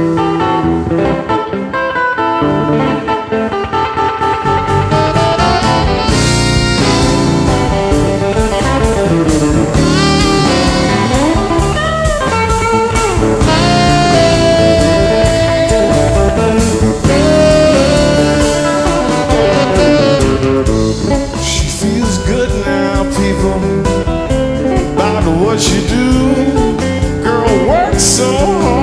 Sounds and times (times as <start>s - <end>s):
Blues: 0.0s - 28.8s.